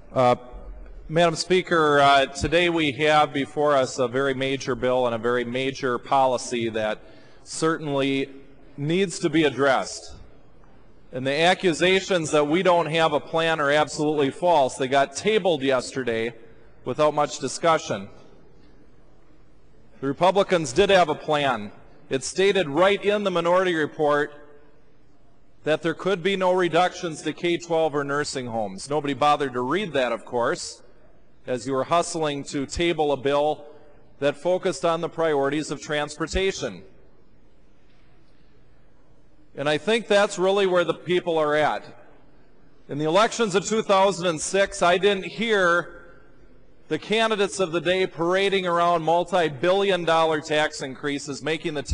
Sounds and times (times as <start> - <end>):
Narration, monologue: 0.0 - 51.9
Male speech, man speaking: 0.1 - 0.5, 1.1 - 10.2, 11.1 - 18.2, 20.0 - 24.4, 25.6 - 36.9, 39.6 - 42.0, 42.9 - 46.0, 46.9 - 51.9.